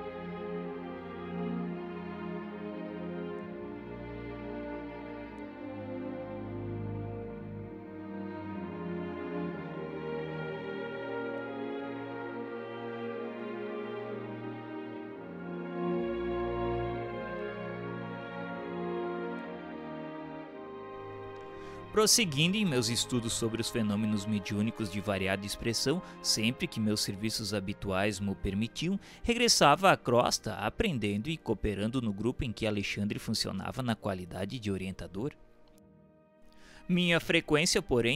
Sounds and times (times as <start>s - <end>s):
Music: 0.0s - 38.1s.